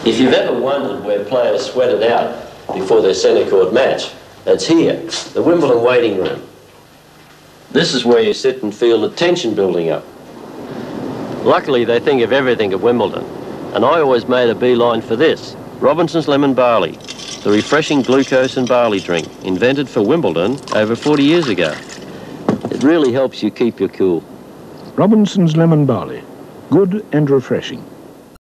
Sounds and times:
Speech: 0.0s - 6.5s, 7.7s - 10.1s, 11.4s - 21.8s, 22.7s - 27.9s
Gurgling: 16.8s - 22.4s.

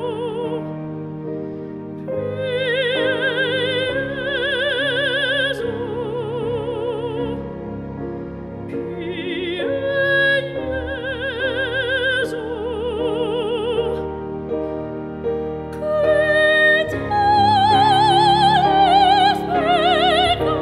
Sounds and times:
Music: 0.0s - 20.6s.

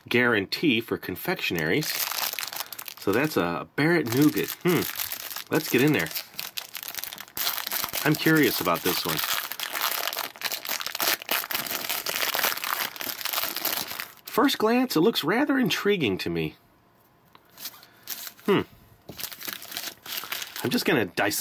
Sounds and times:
Speech: 0.0s - 2.0s, 3.0s - 4.9s, 5.5s - 6.2s, 8.0s - 9.2s, 14.3s - 16.6s, 20.6s - 21.4s
Inside, small room: 0.0s - 21.4s
Crumpling, crinkling: 1.4s - 3.4s, 4.0s - 14.4s, 17.6s - 20.9s.

